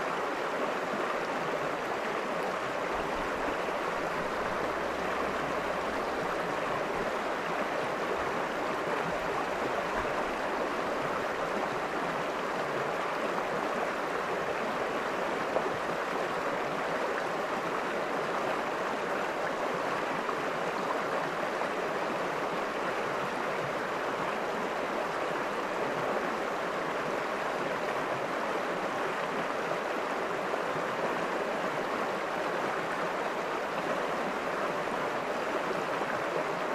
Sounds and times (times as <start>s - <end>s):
Stream: 0.0s - 36.7s.